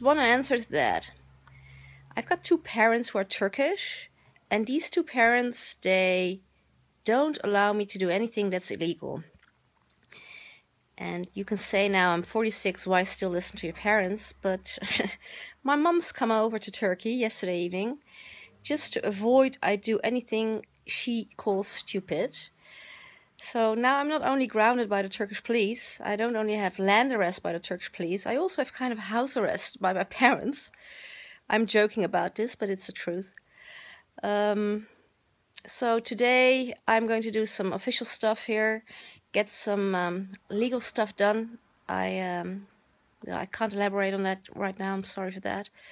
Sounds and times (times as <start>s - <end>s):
Speech: 0.0s - 1.2s, 2.2s - 6.4s, 7.1s - 9.3s, 11.0s - 18.0s, 18.6s - 22.5s, 23.4s - 30.8s, 31.5s - 33.4s, 34.2s - 34.9s, 35.6s - 45.7s.